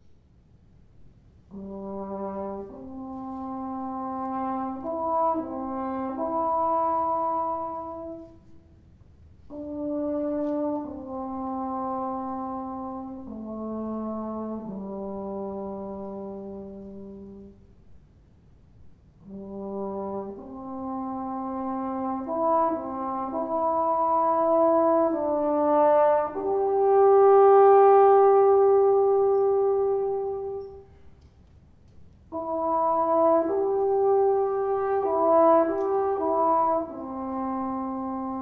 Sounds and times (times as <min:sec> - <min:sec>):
French horn: 0:00.0 - 0:38.4.